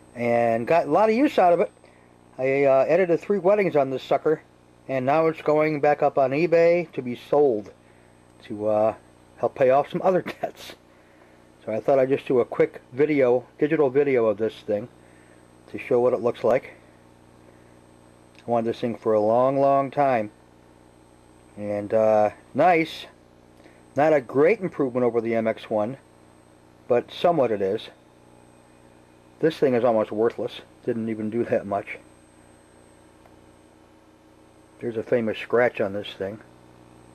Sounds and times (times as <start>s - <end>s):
Speech: 0.2s - 1.7s, 2.4s - 7.8s, 8.4s - 10.8s, 11.6s - 14.9s, 15.7s - 16.8s, 18.4s - 20.4s, 21.6s - 23.2s, 24.0s - 26.0s, 26.9s - 28.0s, 29.4s - 32.1s, 34.8s - 36.5s.